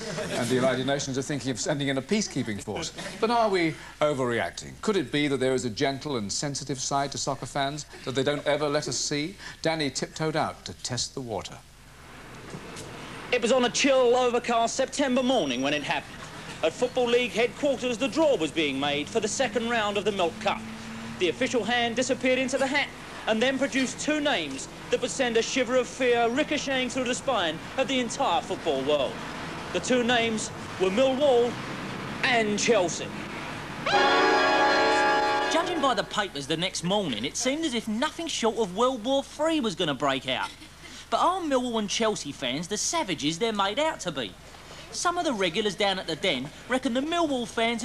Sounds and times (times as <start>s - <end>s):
Speech: 0.1s - 11.6s, 13.3s - 20.6s, 21.2s - 29.1s, 29.8s - 31.6s, 32.2s - 33.1s, 35.5s - 47.8s.